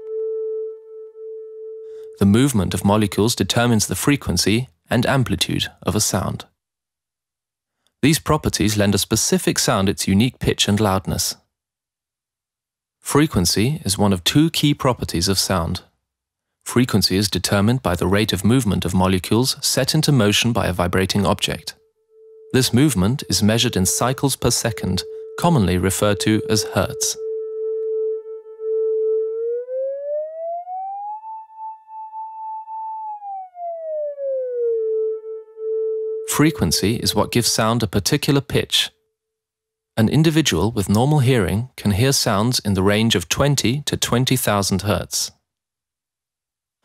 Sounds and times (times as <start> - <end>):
Speech: 2.2 - 6.5, 8.0 - 11.4, 13.1 - 15.9, 16.7 - 21.8, 22.6 - 27.2, 36.3 - 39.0, 40.0 - 45.4.